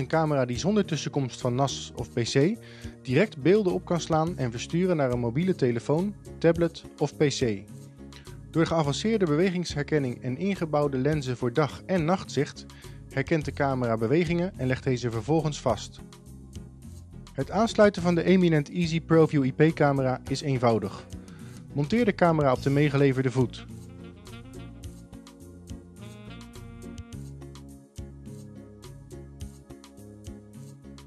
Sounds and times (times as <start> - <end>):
Speech: 0.0 - 7.7, 8.6 - 16.0, 17.4 - 21.1, 21.8 - 23.7.